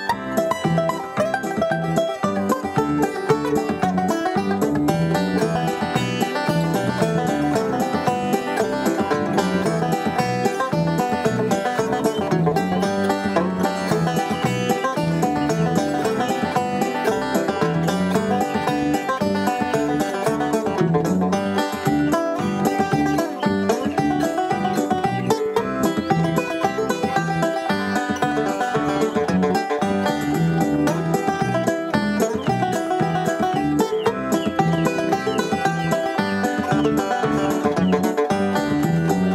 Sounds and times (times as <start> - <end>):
Banjo: 0.0 - 39.3
Bluegrass: 0.0 - 39.3
Bowed string instrument: 0.0 - 39.3.